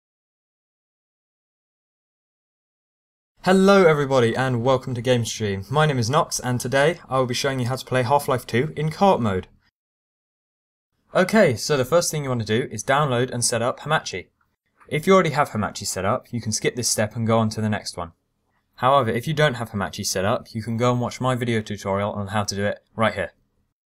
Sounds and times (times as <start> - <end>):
Speech: 3.4 - 9.6, 11.1 - 14.3, 14.9 - 18.2, 18.8 - 23.4.